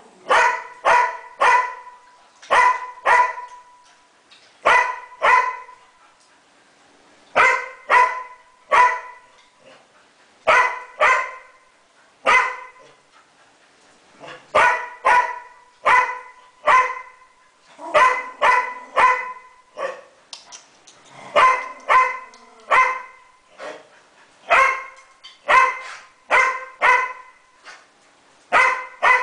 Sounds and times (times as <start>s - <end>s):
Bark: 0.3s - 3.6s, 4.6s - 5.8s, 7.4s - 9.3s, 10.5s - 11.5s, 12.2s - 12.9s, 14.3s - 17.2s, 17.9s - 20.1s, 21.4s - 23.2s, 24.5s - 27.4s, 28.5s - 29.2s.